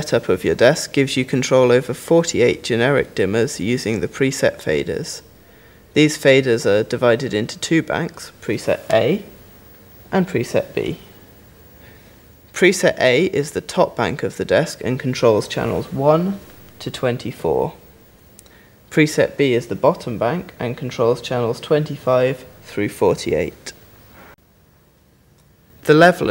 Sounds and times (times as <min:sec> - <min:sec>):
Speech: 0:00.0 - 0:05.3, 0:06.0 - 0:09.3, 0:10.1 - 0:11.2, 0:12.5 - 0:17.9, 0:18.9 - 0:23.8, 0:25.8 - 0:26.3.